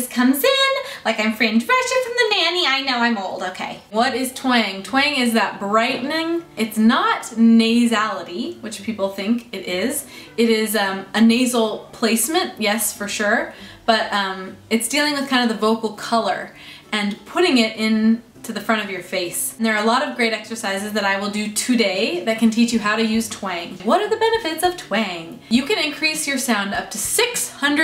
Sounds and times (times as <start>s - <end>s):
Speech: 0.0s - 27.8s.